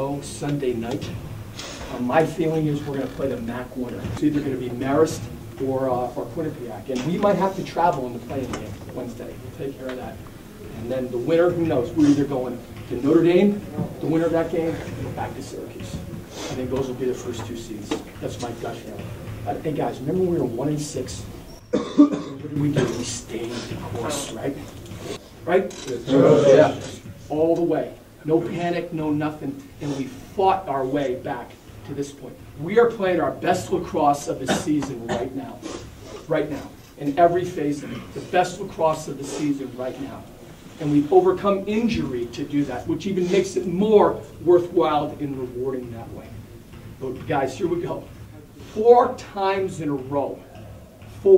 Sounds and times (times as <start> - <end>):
Male speech, man speaking: 0.0 - 1.2, 1.9 - 21.3, 22.1 - 24.7, 25.4 - 46.4, 47.0 - 50.5
Conversation: 0.0 - 51.3.